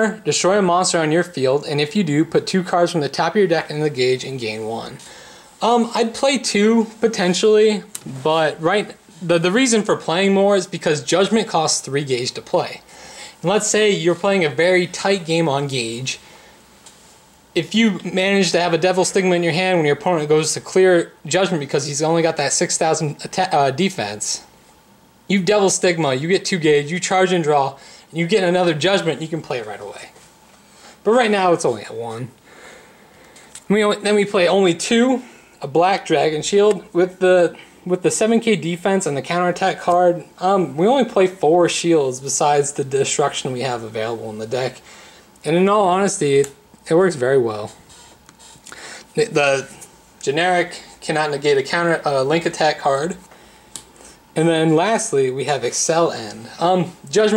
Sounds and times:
Speech: 0.0s - 16.2s, 17.6s - 24.5s, 25.3s - 30.2s, 31.0s - 32.4s, 33.7s - 44.8s, 45.4s - 47.8s, 49.2s - 53.3s, 54.4s - 57.3s
Inside, small room: 0.0s - 57.3s.

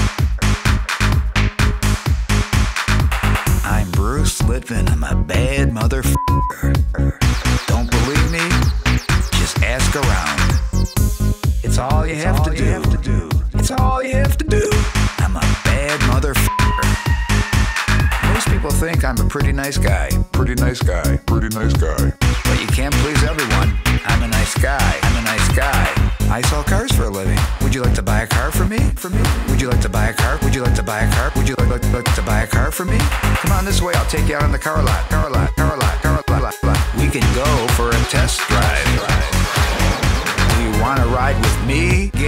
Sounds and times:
Music: 0.0s - 42.2s
Speech: 3.6s - 6.2s, 7.7s - 8.7s, 9.3s - 10.5s, 11.6s - 16.9s, 18.2s - 39.4s, 40.5s - 42.2s.

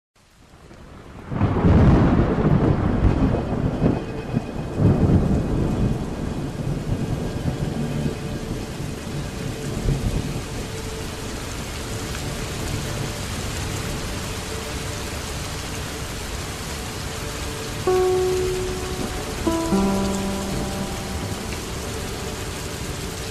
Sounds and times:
Rain: 0.2s - 23.3s
Thunder: 1.2s - 8.5s.

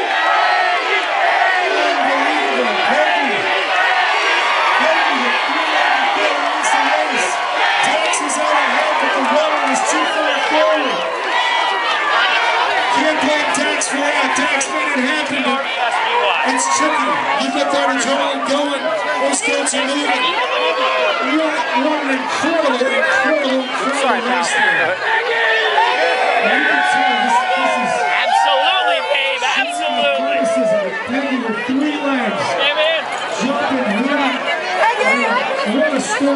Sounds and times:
Crowd: 0.0s - 36.3s
Speech: 1.5s - 3.5s, 4.7s - 11.1s, 12.9s - 25.0s, 26.4s - 36.3s.

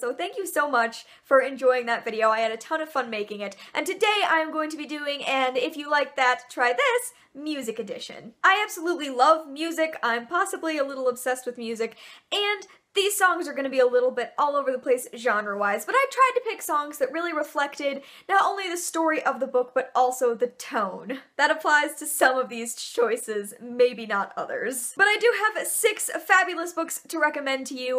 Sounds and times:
Speech: 0.0s - 27.9s.

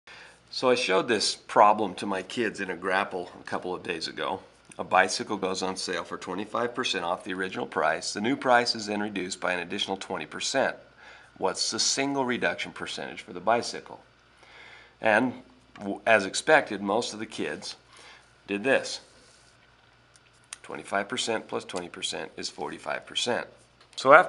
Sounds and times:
Speech: 0.5s - 14.1s, 15.0s - 17.8s, 18.5s - 19.1s, 20.6s - 24.2s.

